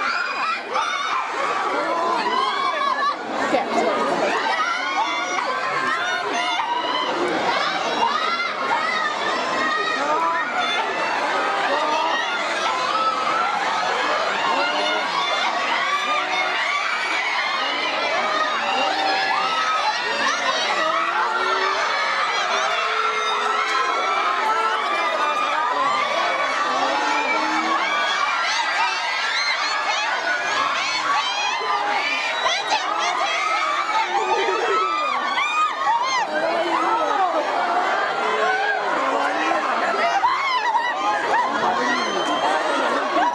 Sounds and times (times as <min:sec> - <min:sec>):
Children shouting: 0:00.0 - 0:43.3
Crowd: 0:00.0 - 0:43.3.